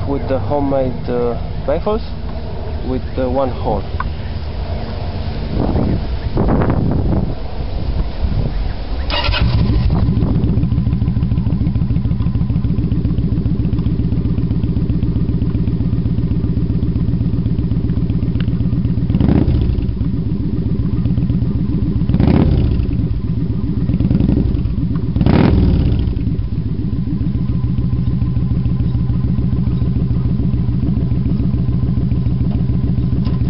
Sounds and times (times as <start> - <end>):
Speech: 0.0 - 2.2, 2.8 - 3.9
Motorcycle: 0.0 - 33.5
Outside, urban or manmade: 0.0 - 33.5
Rustling leaves: 4.4 - 10.4
Engine starting: 9.1 - 10.0.